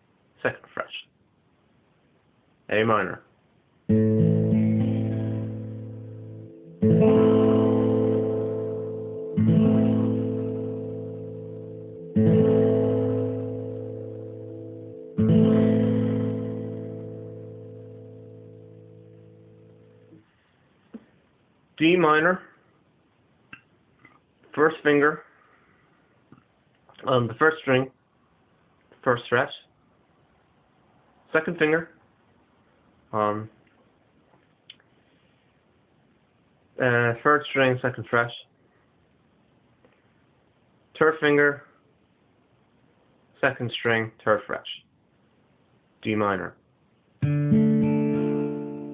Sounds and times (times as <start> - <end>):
Inside, small room: 0.0 - 48.9
Speech: 0.4 - 1.1, 2.7 - 3.3, 21.8 - 22.6, 24.5 - 25.3, 27.0 - 28.0, 29.0 - 29.7, 31.3 - 32.0, 33.1 - 33.6, 36.8 - 38.6, 41.0 - 41.7, 43.4 - 44.9, 46.0 - 46.6.